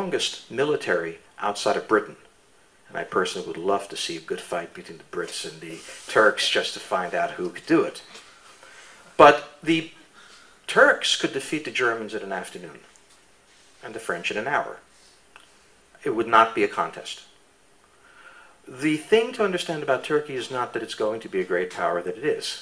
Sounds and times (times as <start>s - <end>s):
Speech: 0.0s - 2.3s, 2.9s - 8.1s, 9.2s - 10.0s, 10.7s - 12.9s, 13.8s - 14.9s, 16.0s - 17.4s, 18.7s - 22.6s.